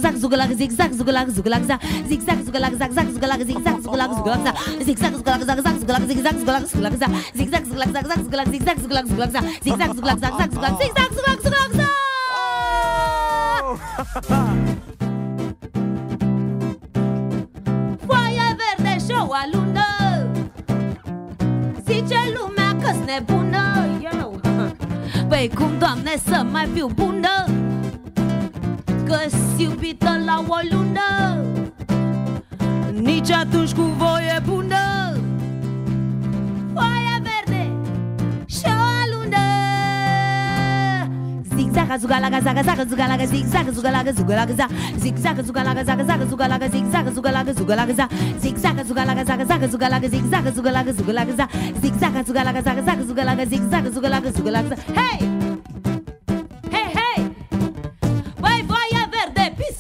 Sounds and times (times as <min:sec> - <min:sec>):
Music: 0:00.0 - 0:59.8.